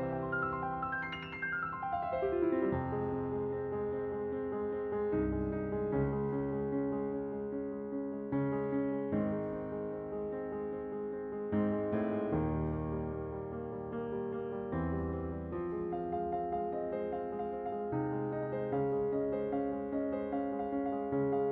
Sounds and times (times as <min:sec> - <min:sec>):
Piano: 0:00.0 - 0:21.5.